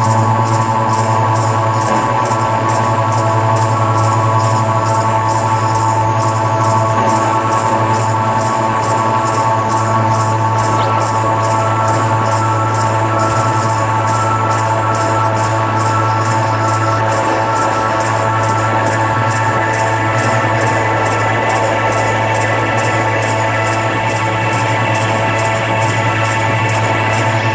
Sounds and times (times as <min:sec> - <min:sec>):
Music: 0:00.0 - 0:27.5.